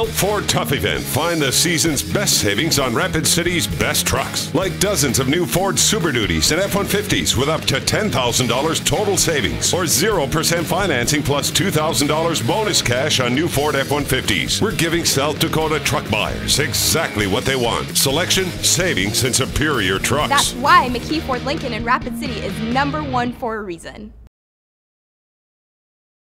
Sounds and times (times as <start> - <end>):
Speech: 0.0 - 24.1
Music: 0.0 - 24.3.